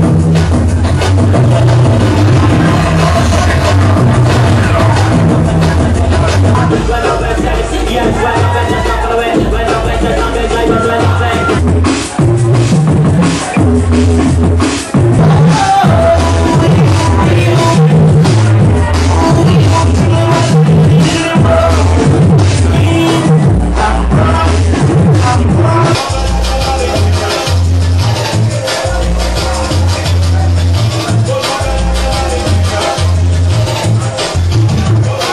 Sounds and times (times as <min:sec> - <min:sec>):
Music: 0:00.0 - 0:35.3.